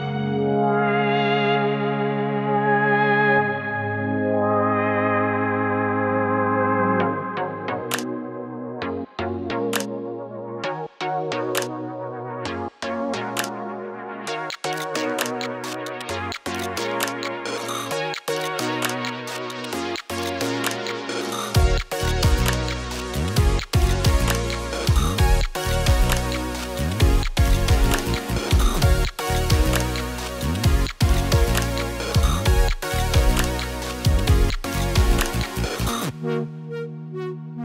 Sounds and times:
Electronic music: 0.0s - 37.6s.

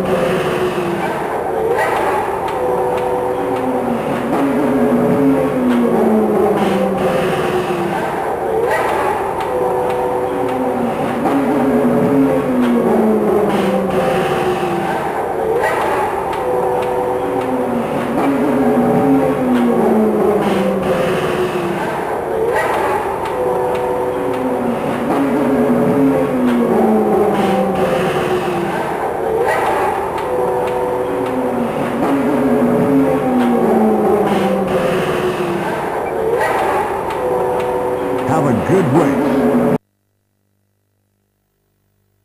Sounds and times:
Race car, auto racing: 17.8s - 23.0s, 24.4s - 30.0s, 31.8s - 36.8s.

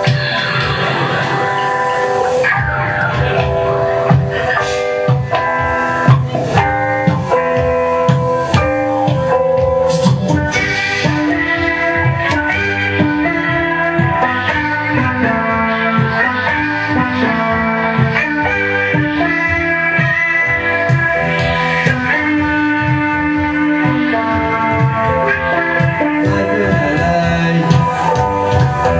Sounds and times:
Rock music: 0.0s - 28.9s.

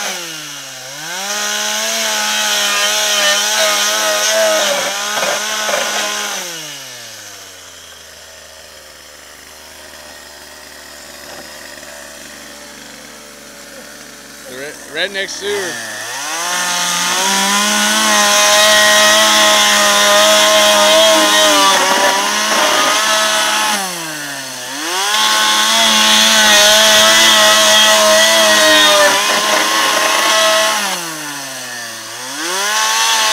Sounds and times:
Chainsaw: 0.0s - 33.3s
Power tool: 0.0s - 33.3s.

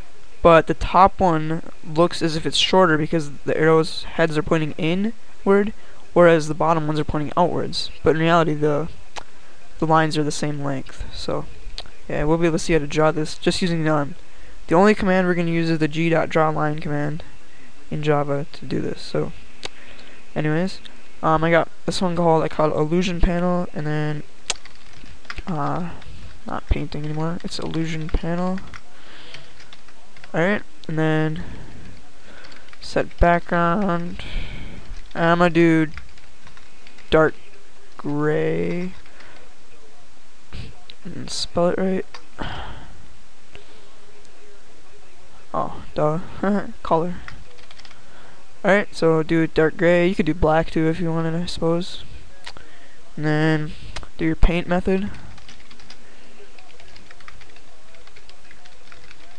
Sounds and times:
Speech: 0.4s - 17.3s, 17.9s - 19.4s, 20.3s - 24.3s, 25.4s - 36.0s, 37.0s - 43.0s, 43.6s - 47.6s, 48.6s - 55.4s, 56.0s - 59.3s.

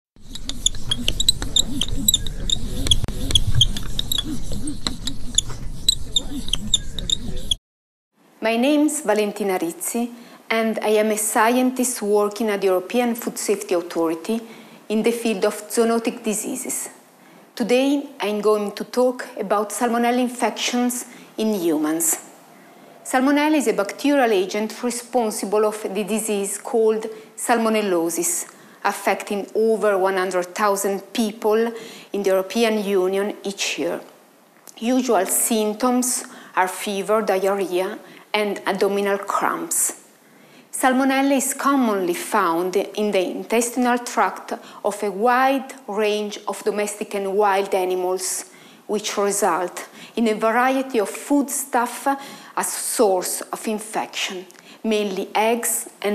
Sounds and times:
Speech: 8.4s - 17.0s, 17.6s - 22.2s, 23.1s - 34.1s, 34.7s - 40.0s, 40.7s - 56.1s.

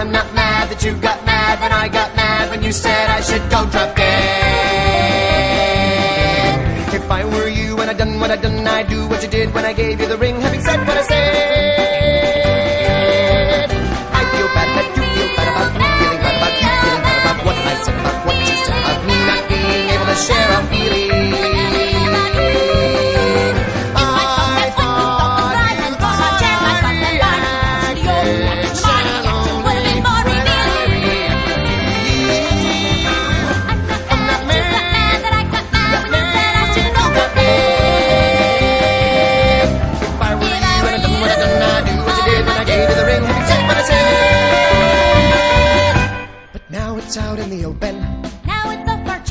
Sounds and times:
Funny music: 0.0s - 49.3s.

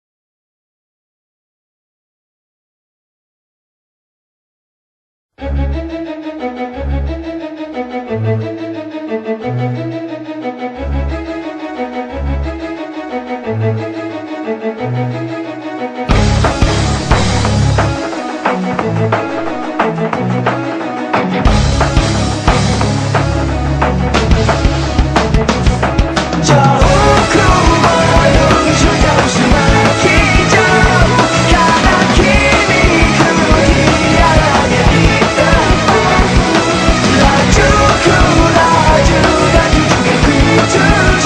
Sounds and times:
Bowed string instrument: 5.4s - 41.2s.

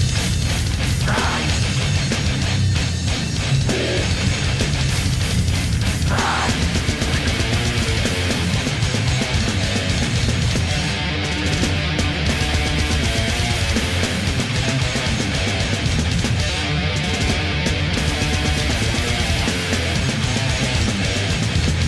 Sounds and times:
Heavy metal: 0.0s - 21.8s.

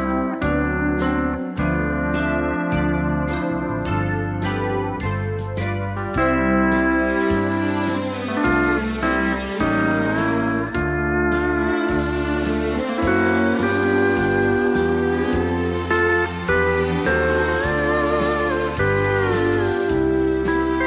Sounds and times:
Steel guitar, slide guitar: 0.0s - 20.8s.

